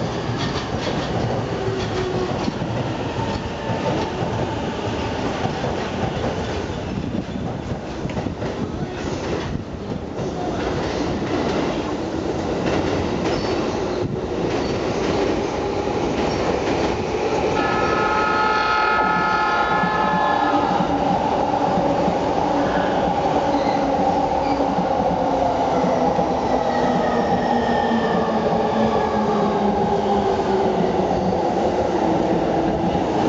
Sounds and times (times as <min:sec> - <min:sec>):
Outside, urban or manmade: 0:00.0 - 0:33.2
Train: 0:00.0 - 0:33.2.